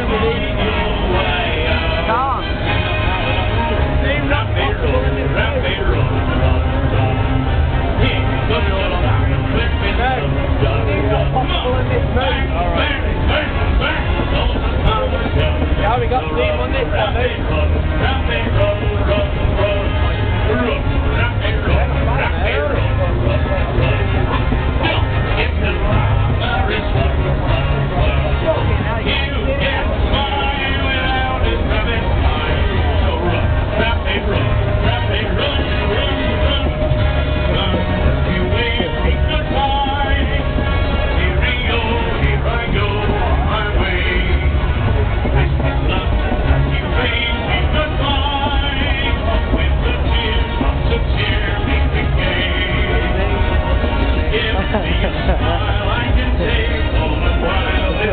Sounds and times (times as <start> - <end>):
Music: 0.0 - 58.1
Speech: 0.0 - 58.1.